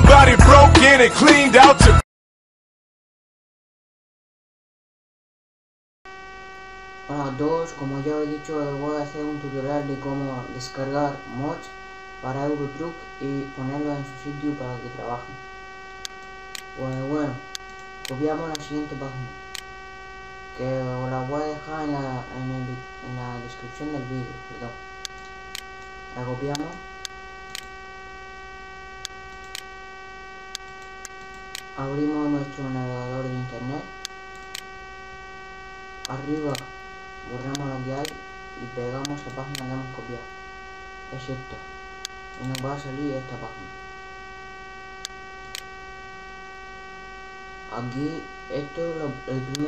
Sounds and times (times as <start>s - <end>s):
Speech: 7.1s - 15.4s, 16.8s - 17.4s, 18.1s - 19.4s, 20.6s - 24.8s, 26.2s - 26.8s, 31.8s - 33.9s, 36.1s - 36.7s, 37.3s - 40.3s, 41.1s - 41.6s, 42.4s - 43.7s, 47.7s - 49.6s.